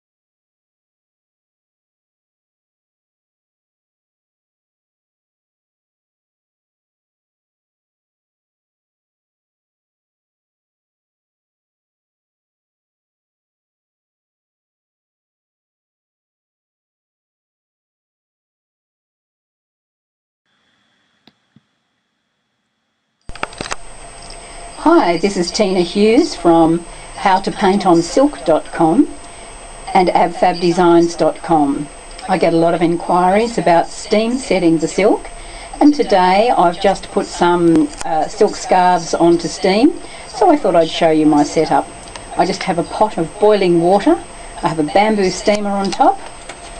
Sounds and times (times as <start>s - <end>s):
Speech: 24.8s - 29.2s, 29.9s - 46.2s.